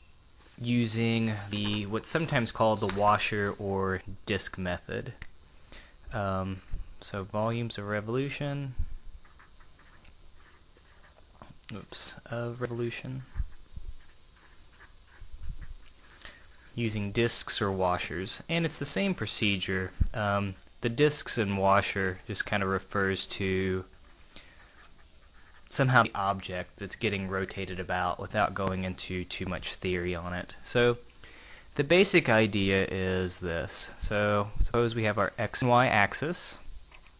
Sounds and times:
Speech: 0.6s - 5.2s, 6.1s - 8.8s, 11.7s - 13.4s, 16.8s - 23.9s, 25.7s - 31.0s, 31.8s - 36.6s.

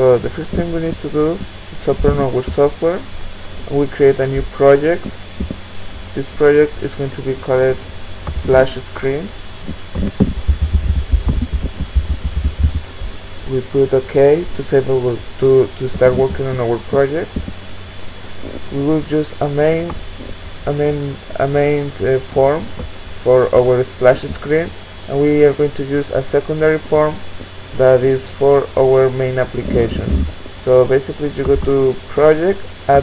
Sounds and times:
Speech: 0.0s - 3.1s, 3.7s - 5.1s, 6.2s - 7.8s, 8.4s - 9.4s, 13.5s - 17.4s, 18.5s - 20.0s, 20.6s - 33.0s.

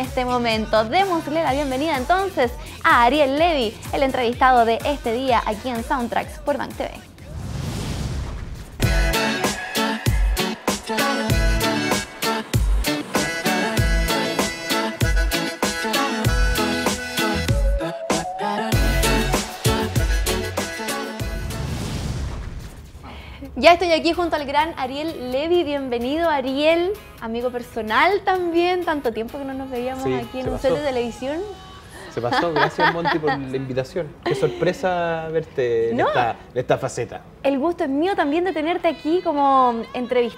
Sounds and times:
Music: 0.0s - 7.9s, 8.8s - 22.5s, 23.4s - 40.3s.

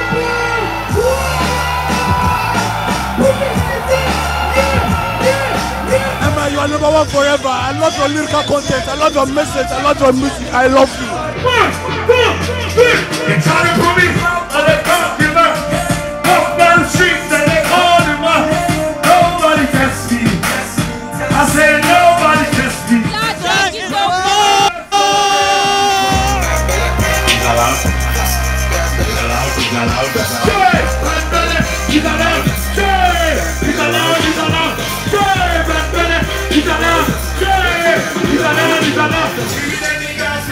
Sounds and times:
Music: 0.0s - 40.5s.

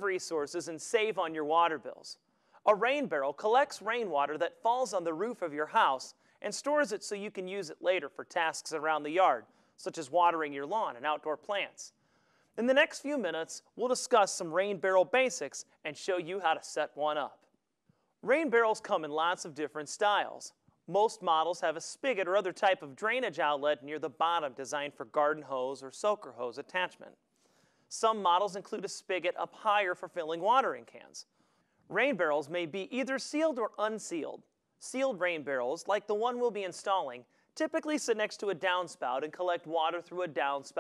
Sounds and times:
Speech: 0.0s - 12.0s, 12.6s - 17.5s, 18.2s - 27.2s, 27.9s - 31.3s, 31.9s - 40.8s.

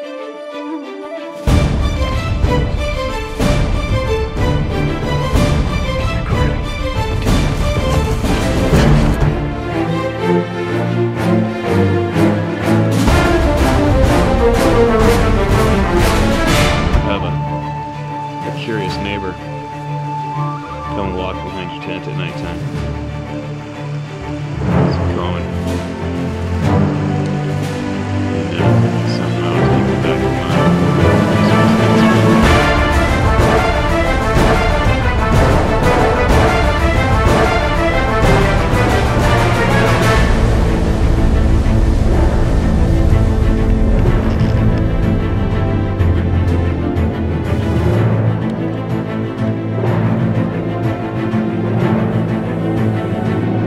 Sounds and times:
Music: 0.0s - 53.6s
Speech: 17.0s - 17.4s, 18.4s - 19.5s, 20.9s - 22.6s, 24.8s - 25.5s, 28.5s - 32.1s.

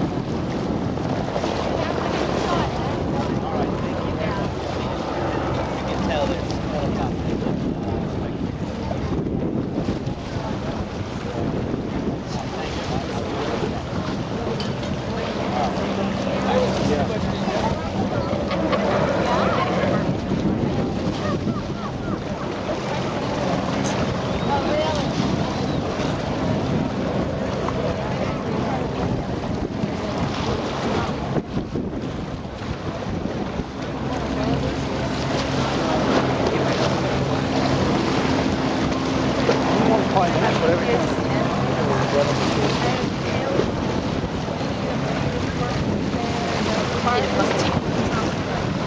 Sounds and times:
Sailboat, sailing ship: 0.0s - 48.8s
Wind noise (microphone): 0.0s - 48.8s.

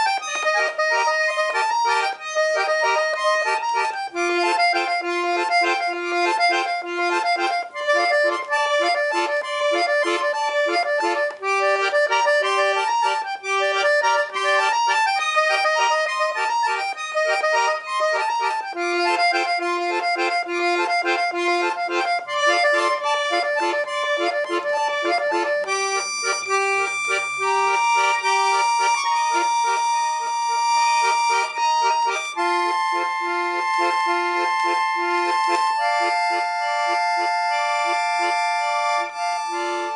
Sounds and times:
Accordion: 0.0s - 39.9s
Inside, small room: 0.0s - 39.9s.

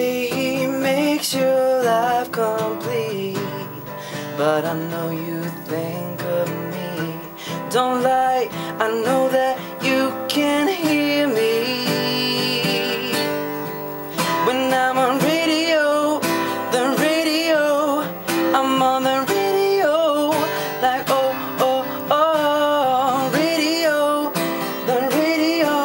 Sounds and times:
Music: 0.0s - 25.8s.

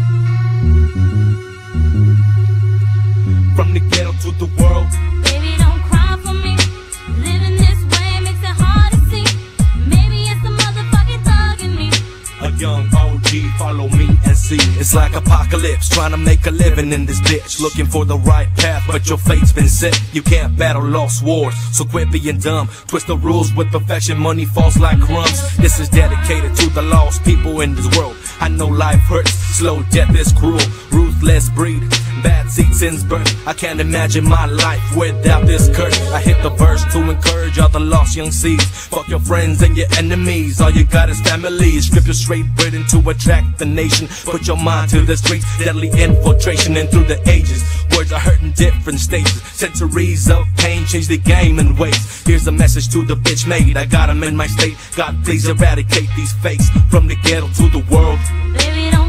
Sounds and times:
Music: 0.0s - 59.0s.

